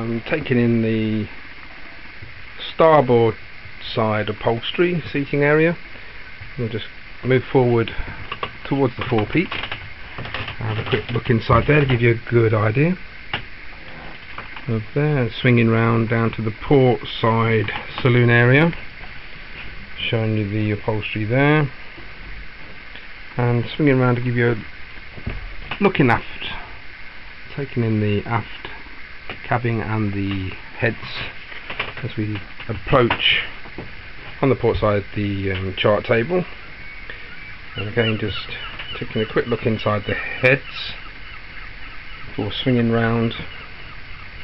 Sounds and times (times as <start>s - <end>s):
Speech: 0.0s - 1.3s, 2.6s - 5.8s, 6.6s - 8.0s, 8.6s - 9.6s, 10.6s - 13.0s, 14.7s - 18.8s, 20.0s - 21.8s, 23.4s - 24.7s, 25.8s - 26.7s, 27.5s - 28.8s, 29.4s - 31.4s, 32.0s - 33.6s, 34.4s - 36.5s, 37.8s - 41.0s, 42.4s - 43.5s.